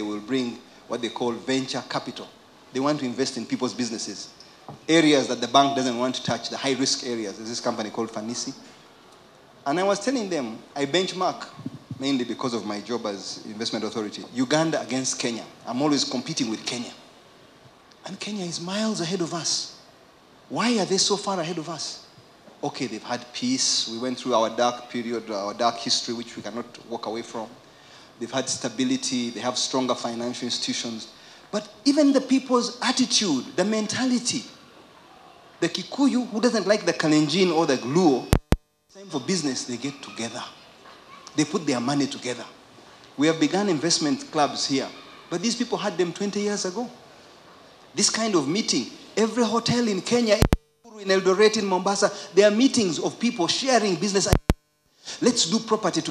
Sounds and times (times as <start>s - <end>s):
Speech: 0.0s - 4.3s, 4.9s - 8.6s, 9.7s - 17.0s, 18.0s - 19.8s, 20.5s - 22.0s, 22.6s - 27.6s, 28.2s - 34.6s, 35.6s - 38.4s, 39.0s - 40.6s, 41.3s - 42.6s, 43.2s - 47.0s, 48.0s - 54.4s, 55.2s - 56.1s.